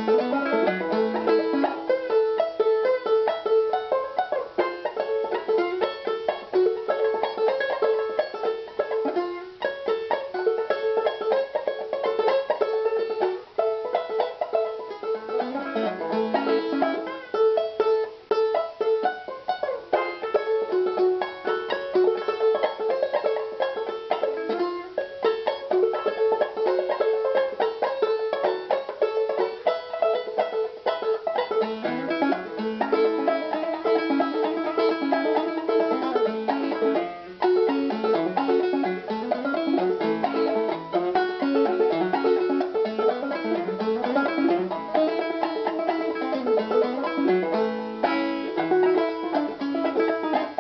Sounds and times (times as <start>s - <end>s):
Banjo: 0.0s - 50.6s
Bluegrass: 0.0s - 50.6s
Inside, small room: 0.0s - 50.6s.